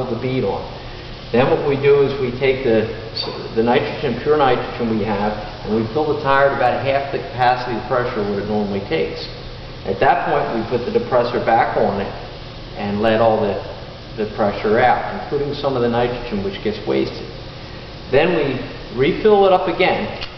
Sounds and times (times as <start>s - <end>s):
Speech: 0.0s - 0.7s, 1.4s - 12.2s, 12.8s - 17.3s, 18.1s - 20.2s.